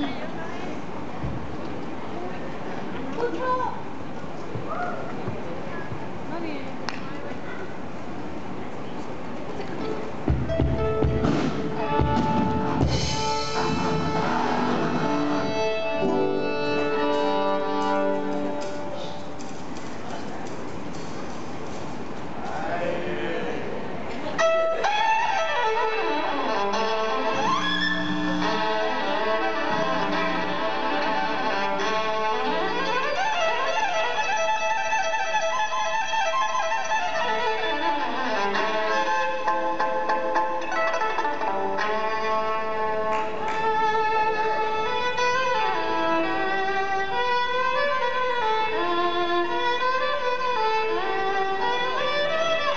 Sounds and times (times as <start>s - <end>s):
Violin, fiddle: 9.6s - 19.3s, 24.4s - 52.7s.